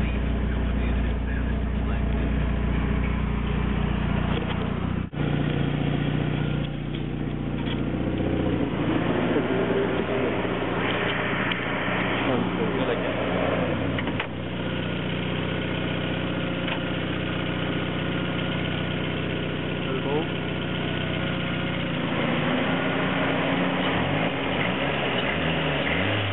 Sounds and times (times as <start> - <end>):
Speech: 0.0 - 3.0, 12.2 - 13.3, 19.8 - 20.3
Outside, rural or natural: 0.0 - 26.3
Vehicle: 0.0 - 26.3.